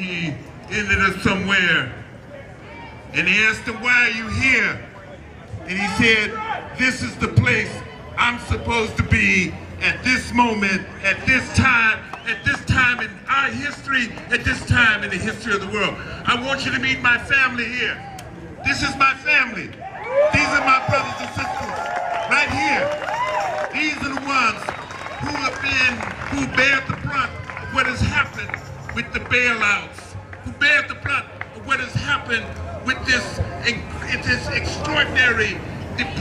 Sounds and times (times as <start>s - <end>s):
Male speech, man speaking: 0.0s - 2.0s, 3.1s - 18.0s, 18.6s - 19.7s, 20.3s - 22.9s, 23.7s - 36.2s
Narration, monologue: 0.0s - 2.3s, 3.1s - 36.2s.